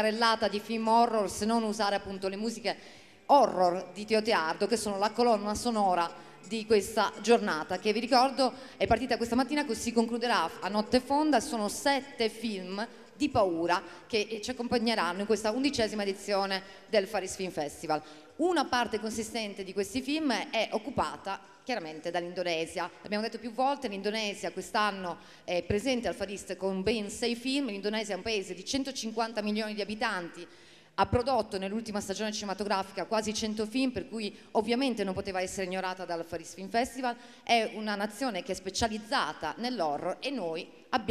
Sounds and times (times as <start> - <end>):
Speech: 0.0 - 41.1.